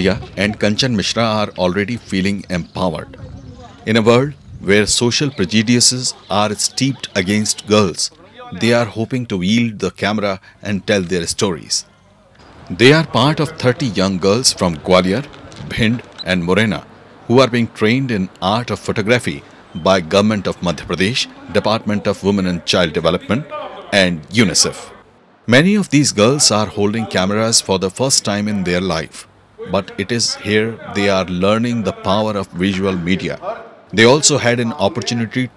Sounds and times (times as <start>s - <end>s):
Speech: 0.0s - 11.9s, 12.7s - 35.5s.